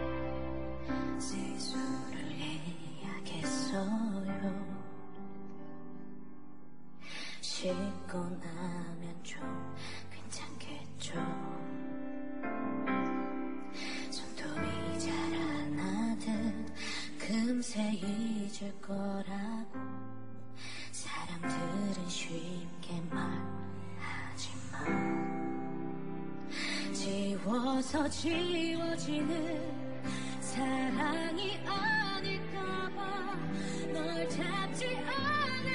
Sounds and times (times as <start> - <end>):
Music: 0.0 - 35.7.